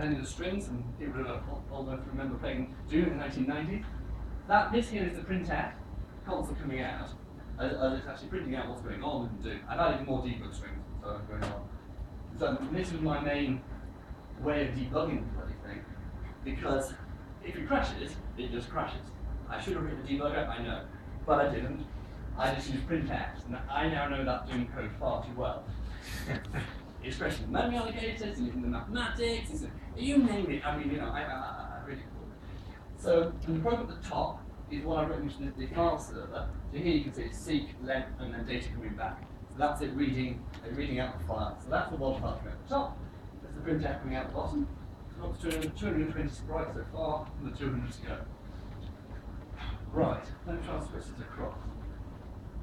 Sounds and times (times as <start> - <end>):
Speech: 0.0 - 3.9, 4.5 - 11.7, 12.3 - 13.7, 14.4 - 32.4, 33.0 - 48.3, 49.6 - 51.9.